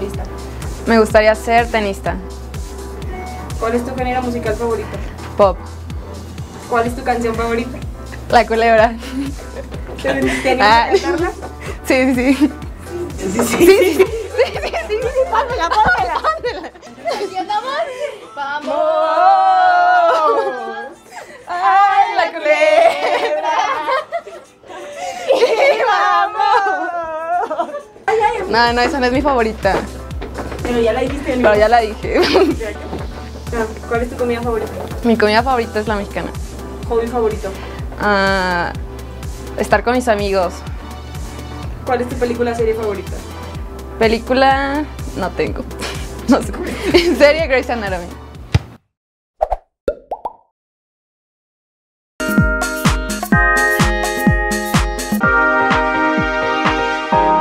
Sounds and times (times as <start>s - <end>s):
Female speech, woman speaking: 0.0s - 0.3s, 0.9s - 2.2s, 3.6s - 5.6s, 6.7s - 9.0s, 10.0s - 12.5s, 15.0s - 23.9s, 25.4s - 29.9s, 30.6s - 38.8s, 39.6s - 40.6s, 41.9s - 43.3s, 44.0s - 45.6s, 46.3s - 48.2s
Music: 0.0s - 48.6s, 52.2s - 57.4s
Plop: 49.4s - 50.5s.